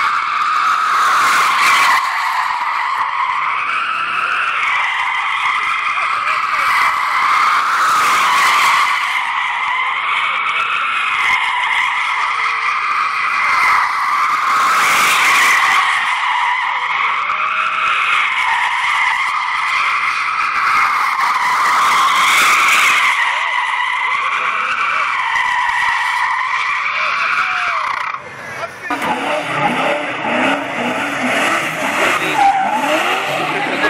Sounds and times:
Skidding: 0:00.0 - 0:33.8.

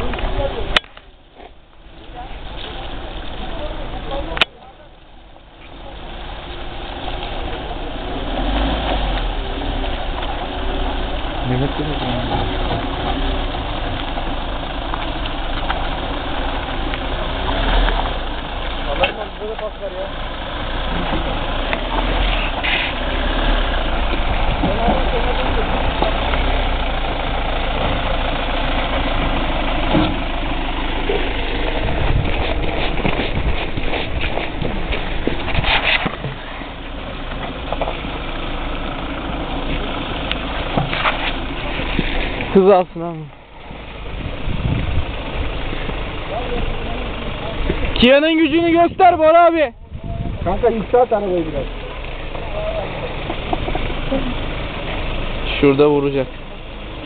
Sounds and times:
Speech: 0:11.4 - 0:12.5, 0:18.9 - 0:20.2, 0:24.6 - 0:26.3, 0:46.3 - 0:51.8, 0:55.5 - 0:56.4.

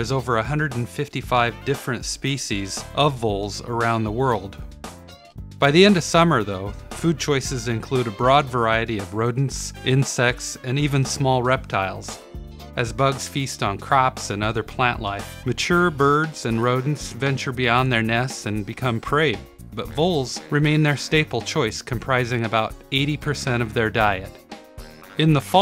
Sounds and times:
Speech: 0:00.0 - 0:04.6, 0:05.6 - 0:12.2, 0:12.8 - 0:24.4, 0:25.2 - 0:25.6
Music: 0:00.0 - 0:25.6.

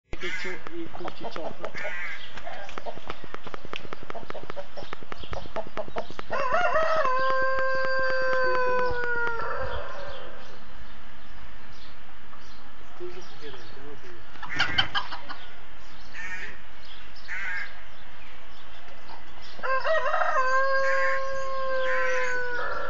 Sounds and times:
Crowing, cock-a-doodle-doo: 0:06.3 - 0:10.4, 0:19.6 - 0:22.8.

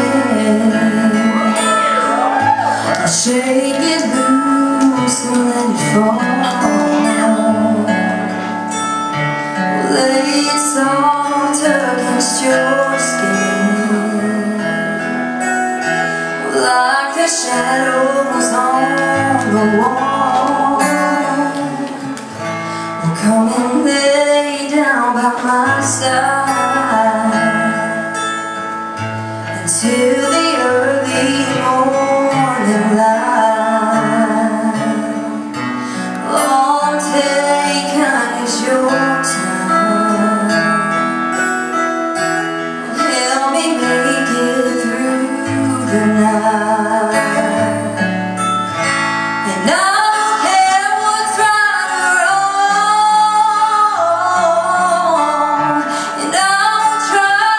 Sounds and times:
Female singing: 0:00.0 - 0:08.5, 0:09.7 - 0:15.2, 0:16.4 - 0:22.2, 0:23.0 - 0:28.3, 0:29.5 - 0:41.5, 0:42.8 - 0:48.2, 0:49.4 - 0:57.5
Music: 0:00.0 - 0:57.5.

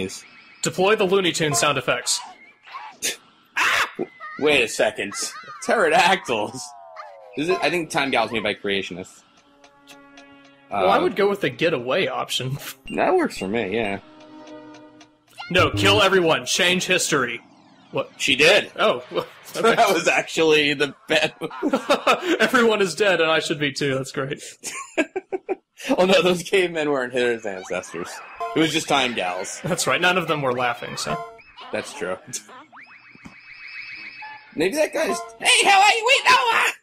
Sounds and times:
Speech: 0:00.0 - 0:02.2, 0:04.4 - 0:06.7, 0:07.4 - 0:09.1, 0:10.8 - 0:14.0, 0:15.4 - 0:17.4, 0:18.0 - 0:24.6, 0:25.8 - 0:31.2, 0:31.8 - 0:32.5, 0:34.6 - 0:36.8.

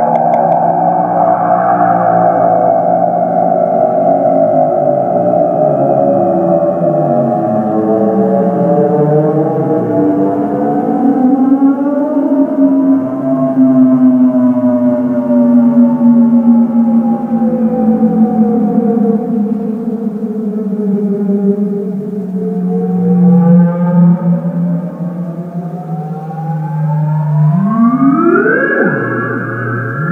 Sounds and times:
Synthesizer: 0:00.0 - 0:30.1.

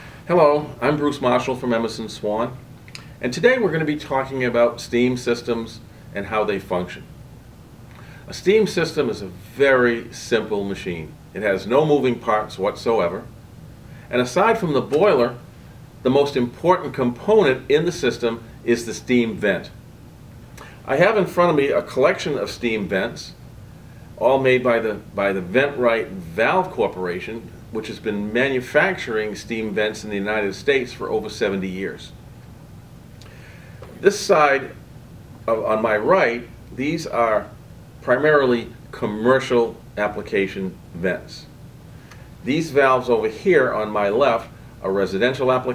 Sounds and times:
Speech: 0:00.3 - 0:02.6, 0:03.2 - 0:07.1, 0:08.3 - 0:13.3, 0:14.1 - 0:19.8, 0:20.8 - 0:23.4, 0:24.2 - 0:32.2, 0:34.0 - 0:34.8, 0:35.4 - 0:41.6, 0:42.4 - 0:45.7.

